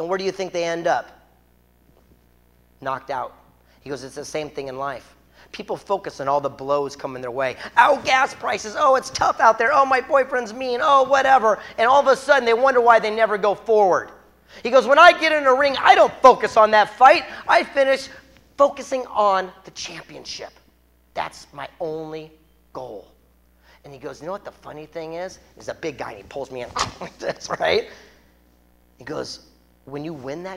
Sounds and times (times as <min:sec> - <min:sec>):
Speech: 0:00.0 - 0:01.3, 0:02.8 - 0:23.2, 0:23.8 - 0:28.1, 0:29.0 - 0:30.5.